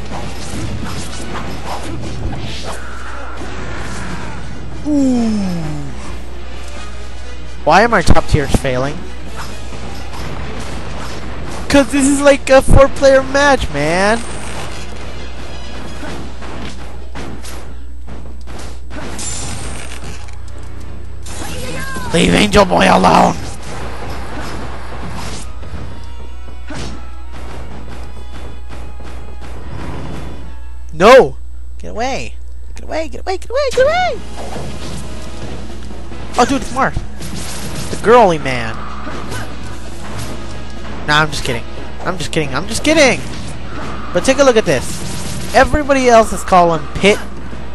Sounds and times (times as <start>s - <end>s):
Music: 0.0s - 31.4s, 33.9s - 44.8s, 45.4s - 47.7s.